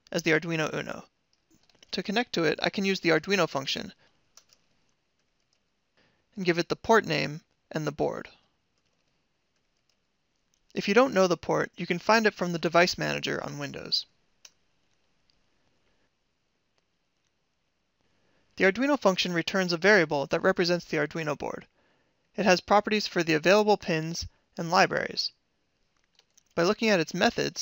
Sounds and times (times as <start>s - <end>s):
Speech: 0.1s - 1.0s, 1.9s - 4.0s, 6.4s - 8.4s, 10.8s - 14.0s, 18.6s - 21.7s, 22.4s - 25.3s, 26.6s - 27.6s.